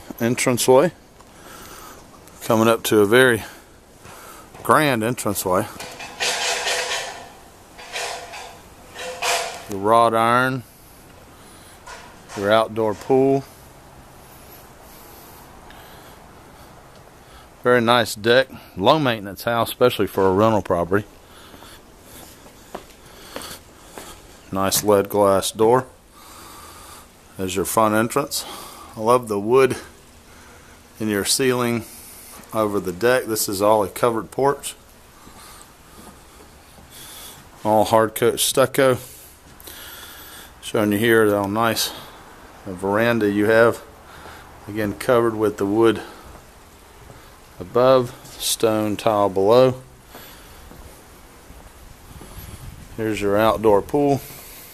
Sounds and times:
Speech: 0.1s - 1.0s, 2.4s - 3.6s, 4.6s - 5.8s, 9.6s - 10.7s, 12.3s - 13.5s, 17.6s - 21.1s, 24.5s - 26.0s, 27.4s - 29.9s, 31.0s - 31.9s, 32.5s - 34.8s, 37.6s - 39.1s, 40.6s - 43.9s, 44.7s - 46.2s, 47.6s - 49.9s, 53.0s - 54.3s.

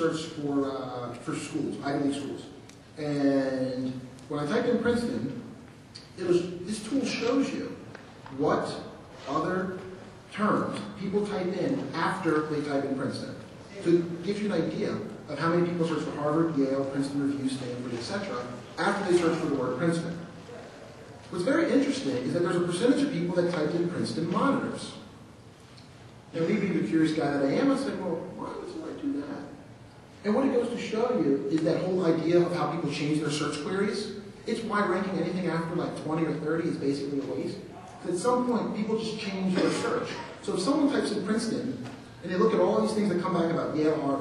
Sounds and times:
Speech: 0.0s - 25.1s, 26.3s - 29.6s, 30.2s - 44.2s.

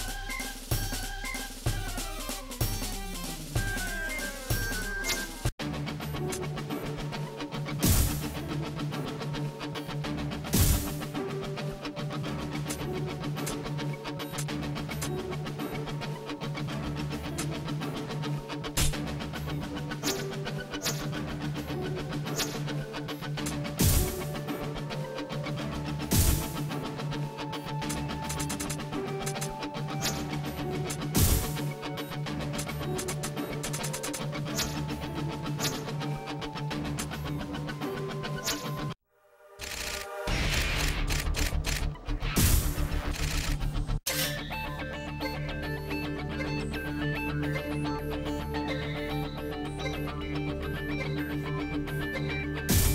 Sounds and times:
Music: 0.0s - 52.9s.

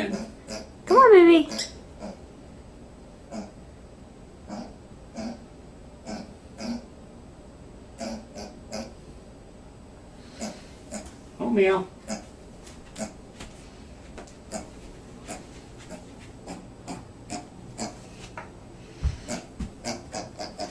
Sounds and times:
Speech: 0.0s - 0.3s, 0.9s - 1.6s, 11.4s - 11.9s
Oink: 0.0s - 0.7s, 1.5s - 2.2s, 3.3s - 3.6s, 4.5s - 5.4s, 6.0s - 6.9s, 8.0s - 9.0s, 10.3s - 11.1s, 12.1s - 12.3s, 14.5s - 14.7s, 15.3s - 18.0s, 19.3s - 20.7s.

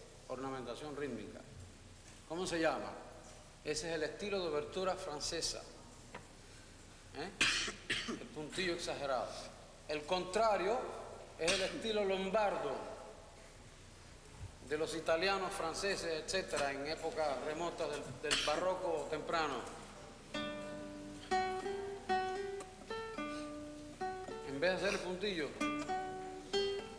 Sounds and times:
Speech: 0.3s - 1.5s, 2.3s - 3.1s, 3.7s - 5.8s, 8.3s - 13.1s, 14.6s - 19.8s, 24.5s - 25.6s.

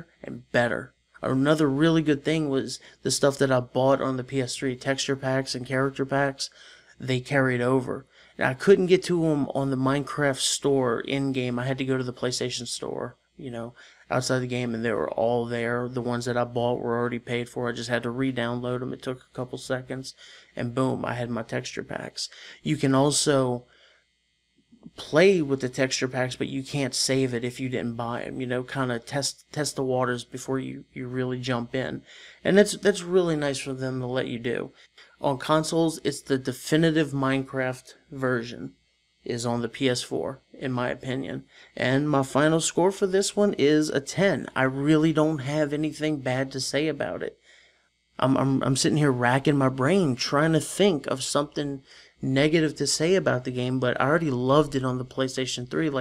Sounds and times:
Narration, monologue: 0.0s - 56.0s.

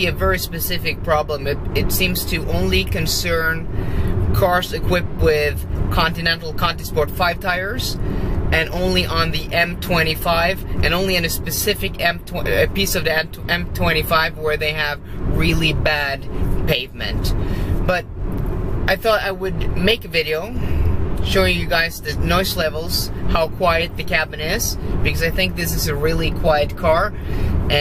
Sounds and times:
Speech: 0.0s - 3.7s, 4.4s - 18.0s, 18.9s - 20.6s, 21.3s - 27.8s.

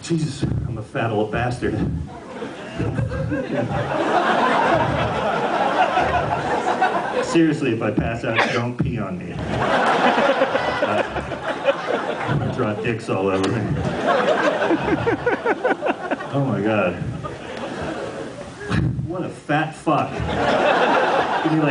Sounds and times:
Speech: 0.0s - 2.1s, 7.2s - 9.4s, 12.3s - 13.9s, 16.3s - 17.2s, 18.7s - 20.2s, 21.4s - 21.7s.

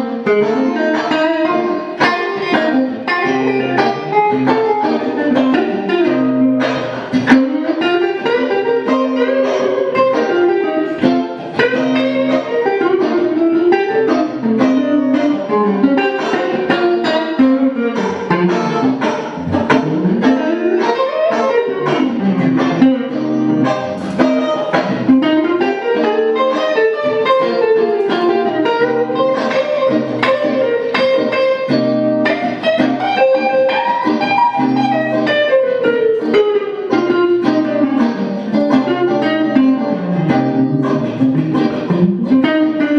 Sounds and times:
Independent music: 0.0s - 42.9s.

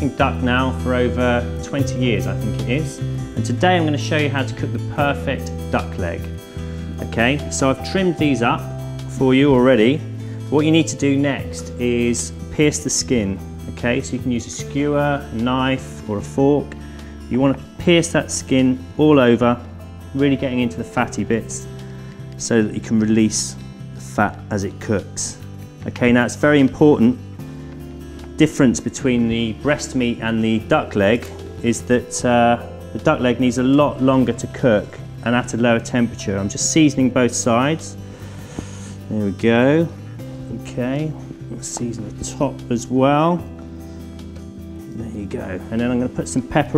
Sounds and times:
Speech: 0.0s - 6.3s, 6.9s - 21.7s, 22.4s - 27.2s, 28.4s - 38.0s, 39.1s - 43.5s, 44.9s - 46.7s
Music: 0.0s - 46.7s.

